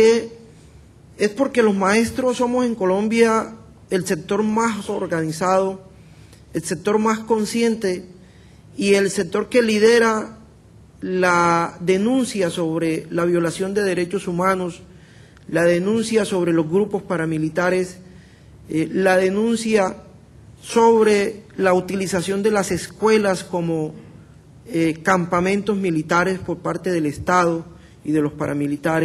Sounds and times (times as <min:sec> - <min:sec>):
Male speech, man speaking: 0:00.0 - 0:00.4, 0:01.2 - 0:05.8, 0:06.6 - 0:08.1, 0:08.8 - 0:10.4, 0:11.0 - 0:14.8, 0:15.5 - 0:18.0, 0:18.7 - 0:24.0, 0:24.7 - 0:29.0
Narration, monologue: 0:00.0 - 0:29.0.